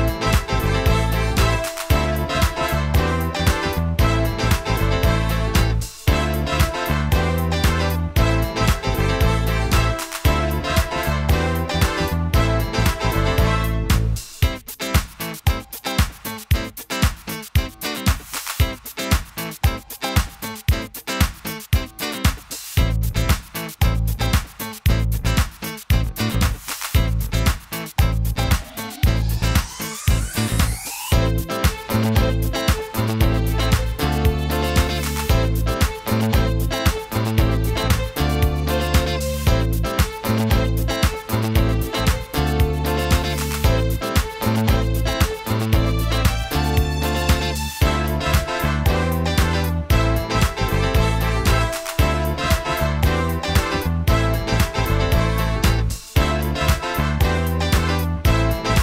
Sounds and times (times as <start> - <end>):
Dance music: 0.0 - 58.8
Pop music: 0.0 - 58.8.